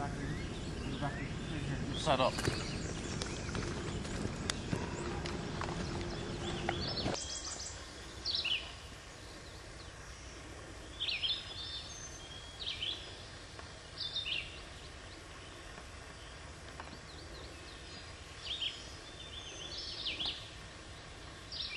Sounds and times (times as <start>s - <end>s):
Bird: 0.0s - 21.7s.